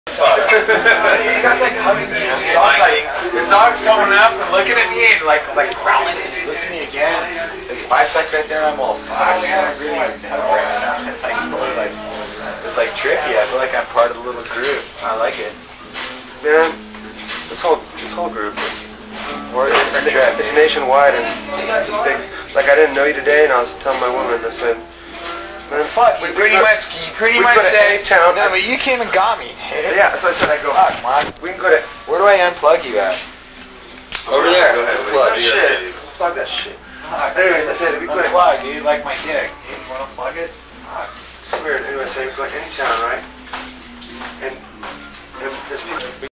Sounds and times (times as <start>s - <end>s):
Speech: 0.1s - 15.6s, 16.4s - 24.8s, 25.7s - 33.3s, 34.3s - 43.4s, 44.3s - 46.3s.